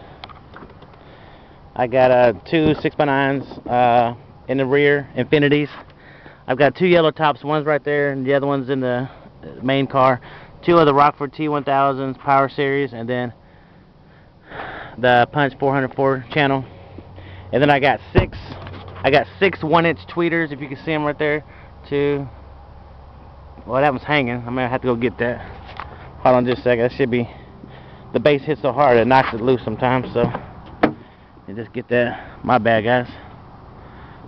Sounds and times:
Speech: 1.8s - 5.8s, 6.5s - 13.4s, 15.0s - 16.7s, 17.5s - 22.4s, 23.6s - 25.5s, 26.2s - 27.4s, 28.1s - 30.4s, 31.5s - 33.3s.

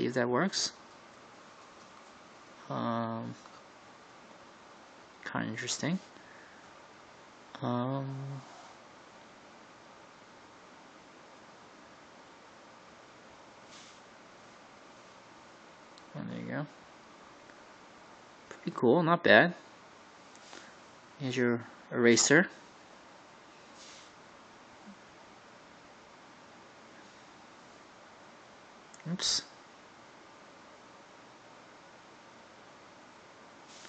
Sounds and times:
Speech: 0.0s - 0.8s, 2.6s - 3.5s, 5.2s - 6.1s, 7.6s - 8.5s, 16.1s - 16.7s, 18.5s - 19.6s, 21.2s - 22.6s, 29.0s - 29.5s.

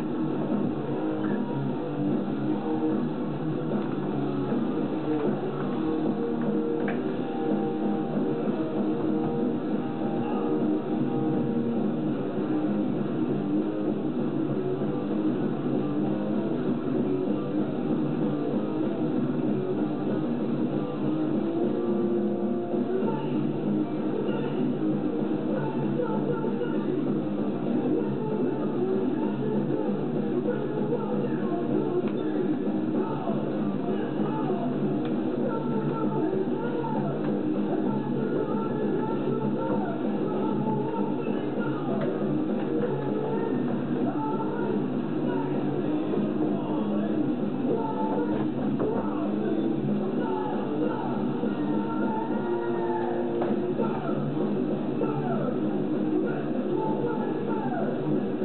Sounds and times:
Music: 0.0s - 58.4s.

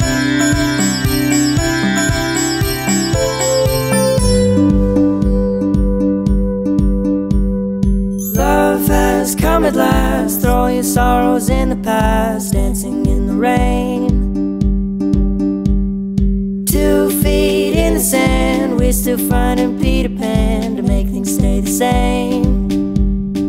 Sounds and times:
Independent music: 0.0s - 23.4s
Tender music: 0.0s - 23.4s.

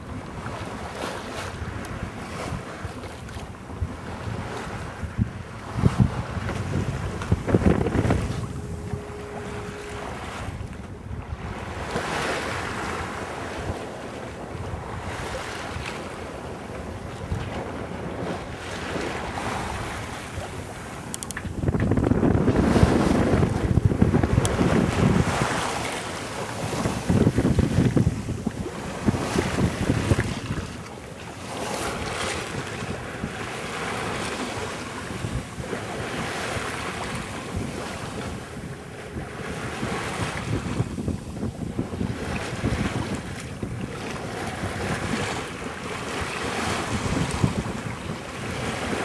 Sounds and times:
Boat, Water vehicle: 0.0s - 49.0s.

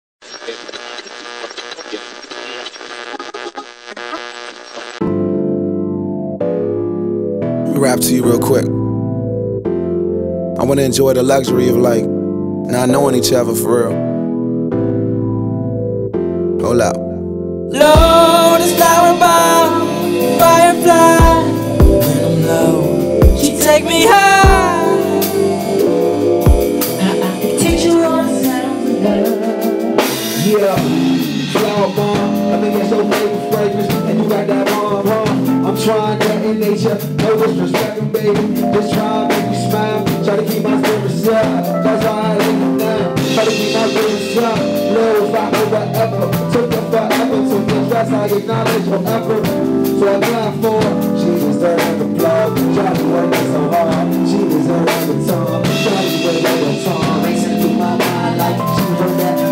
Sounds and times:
Music: 3.0s - 59.5s.

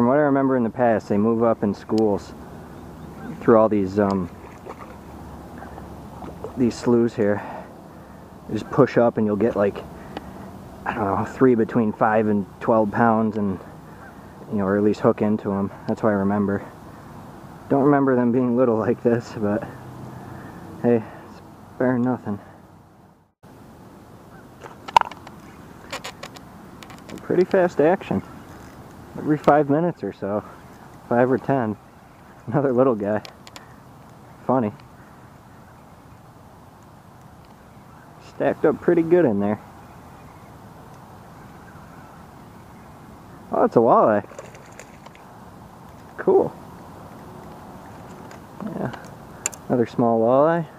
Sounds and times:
Speech: 0.0s - 2.4s, 3.2s - 4.3s, 6.5s - 7.7s, 8.5s - 9.8s, 10.8s - 13.7s, 14.5s - 16.7s, 17.7s - 19.8s, 20.8s - 22.5s, 27.2s - 28.2s, 29.2s - 30.5s, 31.1s - 31.8s, 32.4s - 33.3s, 34.4s - 34.8s, 38.2s - 39.6s, 43.5s - 44.3s, 46.2s - 46.6s, 48.6s - 49.0s, 49.7s - 50.7s
Outside, rural or natural: 0.0s - 50.7s.

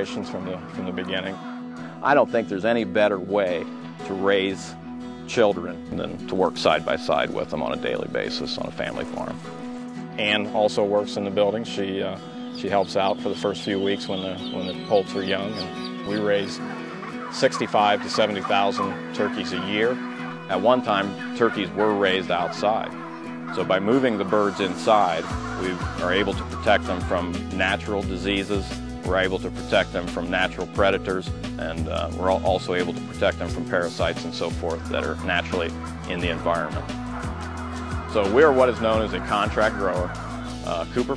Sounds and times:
Speech: 0.0s - 1.4s, 2.0s - 4.7s, 5.3s - 9.4s, 10.2s - 16.6s, 17.3s - 22.9s, 23.5s - 36.8s, 38.1s - 40.1s, 40.7s - 41.1s
Music: 0.0s - 41.1s
Animal: 12.5s - 31.2s, 31.8s - 41.1s.

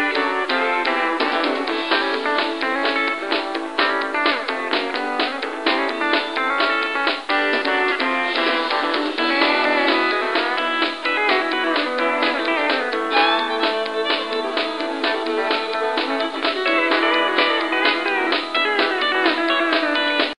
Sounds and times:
Music: 0.0s - 20.3s.

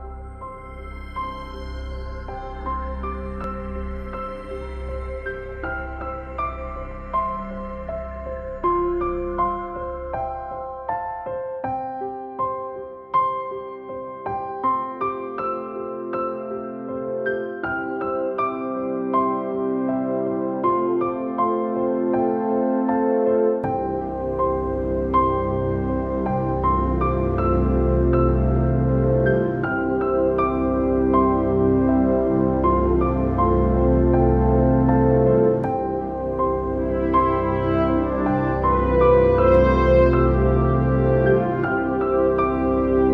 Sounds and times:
Music: 0.0s - 43.1s.

